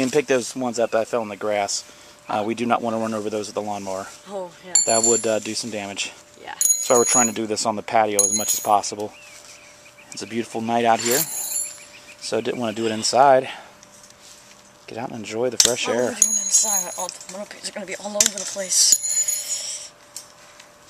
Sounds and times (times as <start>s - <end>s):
Bird vocalization, bird call, bird song: 0.7s - 1.2s, 9.1s - 10.5s, 11.6s - 13.2s
Speech: 12.2s - 13.5s.